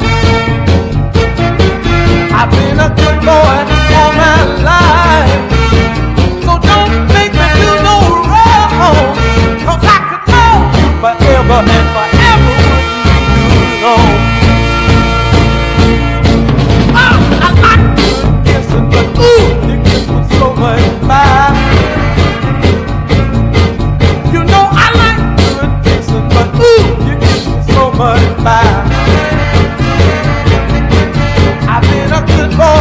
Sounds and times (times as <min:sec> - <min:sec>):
Music: 0:00.0 - 0:32.8.